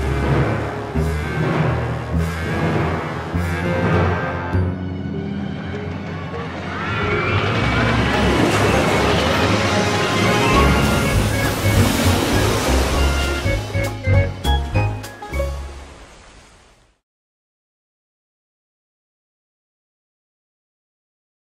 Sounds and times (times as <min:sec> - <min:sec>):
Music: 0:00.0 - 0:16.0
Water: 0:07.6 - 0:17.0
Slosh: 0:08.2 - 0:13.8.